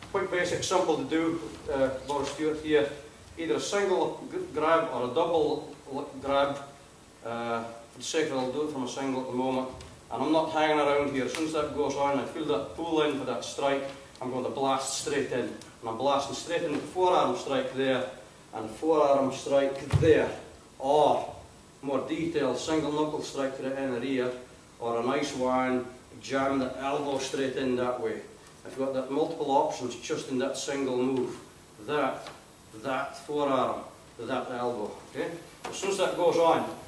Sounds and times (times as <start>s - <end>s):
Speech: 0.1s - 36.8s.